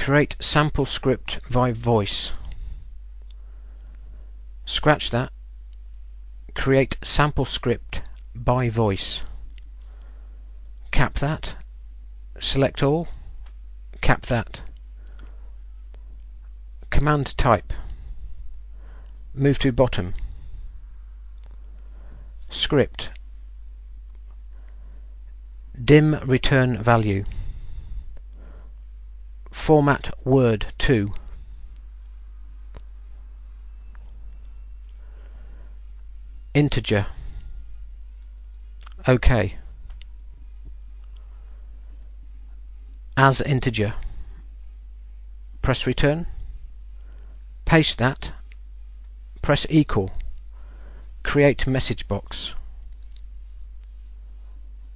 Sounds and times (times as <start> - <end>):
Speech: 0.0 - 2.5, 4.6 - 5.4, 6.5 - 9.4, 10.9 - 11.7, 12.4 - 13.2, 14.0 - 14.7, 16.8 - 17.9, 19.3 - 20.2, 22.5 - 23.2, 25.8 - 27.4, 29.5 - 31.3, 36.5 - 37.2, 38.8 - 39.7, 43.2 - 44.2, 45.6 - 46.4, 47.6 - 48.4, 49.4 - 50.2, 51.2 - 52.6.